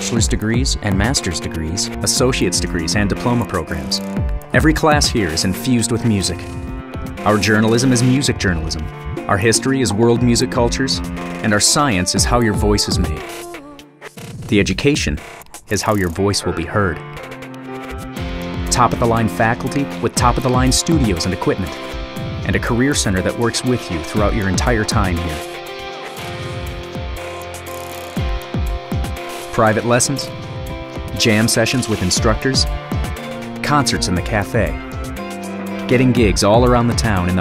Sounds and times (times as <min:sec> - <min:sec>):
Speech: 0:00.0 - 0:06.5, 0:07.2 - 0:13.8, 0:14.5 - 0:17.0, 0:18.7 - 0:21.8, 0:22.4 - 0:25.4, 0:29.5 - 0:30.4, 0:31.1 - 0:32.7, 0:33.6 - 0:34.8, 0:35.9 - 0:37.4
Theme music: 0:00.0 - 0:13.8, 0:15.9 - 0:37.4.